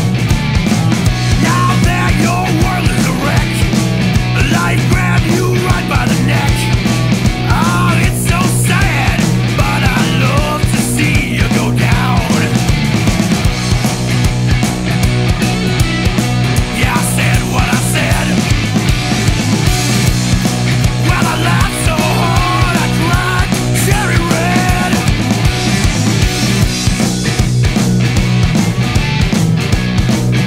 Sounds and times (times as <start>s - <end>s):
Grunge: 0.0s - 30.4s.